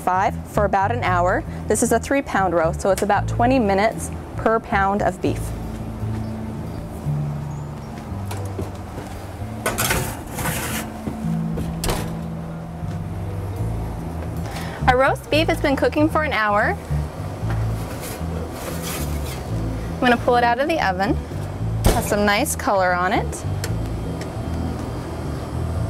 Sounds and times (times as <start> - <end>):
Music: 0.0 - 25.9.